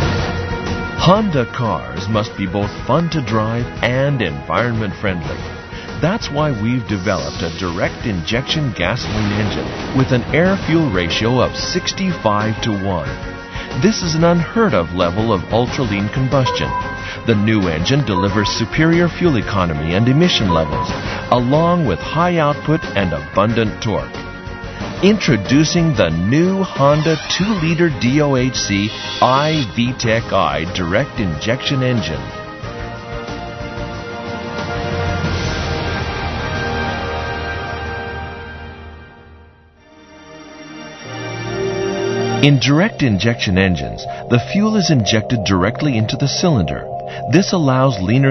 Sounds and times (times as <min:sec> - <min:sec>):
Music: 0:00.0 - 0:48.3
Speech: 0:01.0 - 0:13.2, 0:13.8 - 0:24.2, 0:25.0 - 0:32.3, 0:42.4 - 0:48.3.